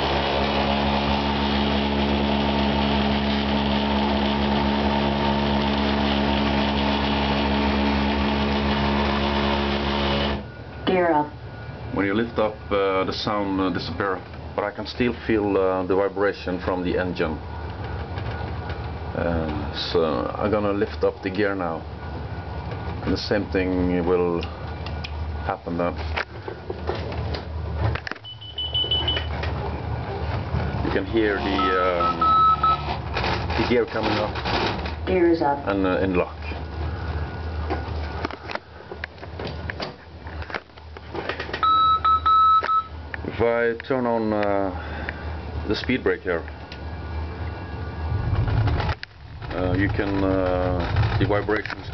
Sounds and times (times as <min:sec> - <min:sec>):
Vehicle: 0:00.0 - 0:51.9
Smoke detector, smoke alarm: 0:28.2 - 0:29.4, 0:31.6 - 0:32.9, 0:41.6 - 0:43.0.